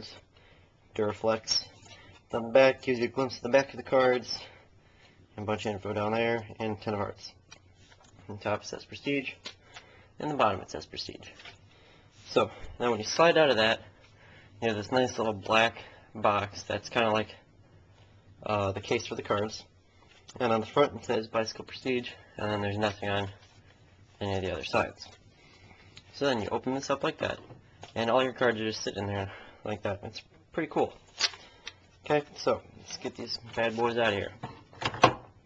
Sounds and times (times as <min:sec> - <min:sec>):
Speech: 0:01.0 - 0:04.6, 0:05.4 - 0:07.4, 0:08.3 - 0:09.4, 0:10.2 - 0:11.4, 0:12.2 - 0:13.9, 0:14.6 - 0:17.4, 0:18.4 - 0:19.7, 0:20.3 - 0:23.4, 0:24.2 - 0:25.2, 0:26.1 - 0:27.4, 0:28.0 - 0:31.0, 0:32.0 - 0:34.4.